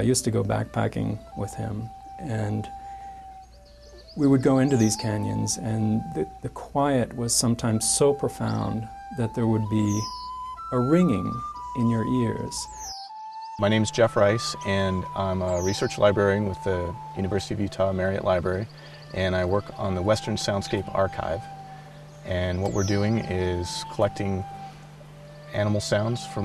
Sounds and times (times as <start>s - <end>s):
Speech: 0.0s - 2.7s, 4.2s - 10.1s, 10.7s - 12.7s, 13.6s - 21.5s, 22.3s - 24.5s, 25.5s - 26.4s
Music: 0.0s - 26.4s.